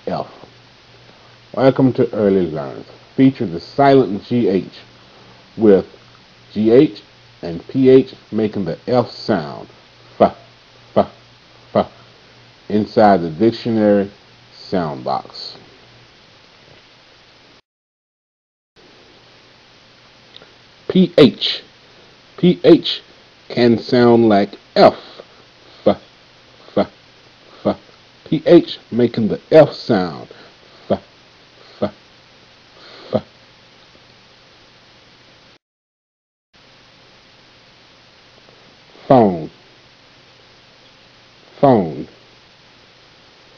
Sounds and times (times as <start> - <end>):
Speech: 0.0 - 0.5, 1.6 - 4.9, 5.6 - 12.0, 12.7 - 15.6, 20.9 - 21.7, 22.4 - 25.2, 25.8 - 26.0, 26.7 - 27.0, 27.6 - 31.1, 31.8 - 32.0, 33.1 - 33.3, 39.0 - 39.6, 41.6 - 42.2.